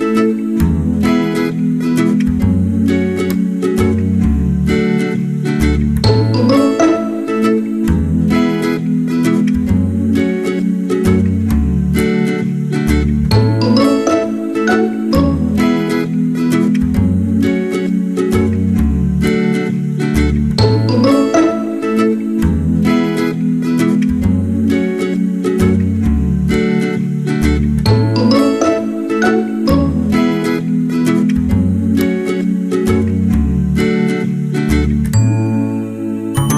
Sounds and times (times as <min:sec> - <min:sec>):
Music: 0:00.0 - 0:36.5.